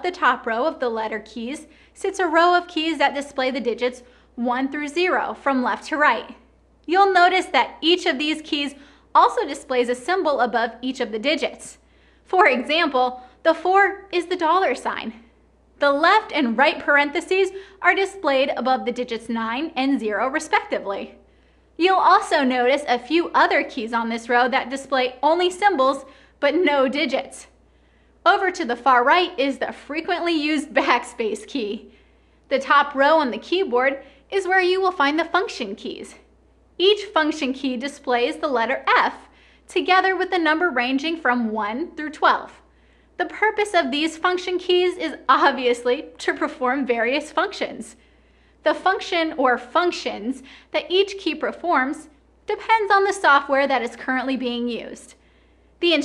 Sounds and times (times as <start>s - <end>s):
Speech: 0.0s - 21.2s, 21.8s - 27.6s, 28.3s - 48.0s, 48.6s - 55.2s, 55.8s - 56.0s.